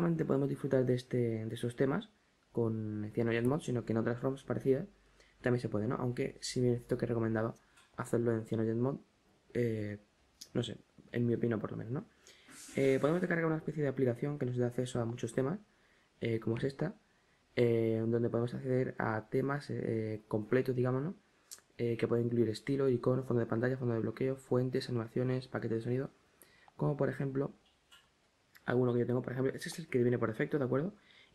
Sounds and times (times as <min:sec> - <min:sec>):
Speech: 0:00.0 - 0:12.1, 0:12.7 - 0:17.0, 0:17.6 - 0:26.2, 0:26.8 - 0:27.6, 0:28.6 - 0:31.0.